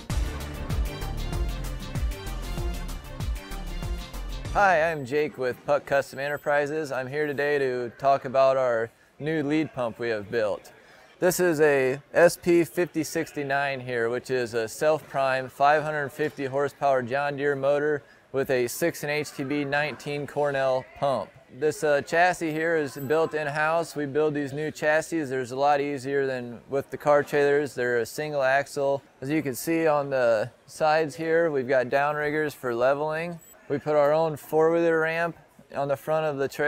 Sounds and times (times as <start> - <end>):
Speech: 4.6 - 36.6.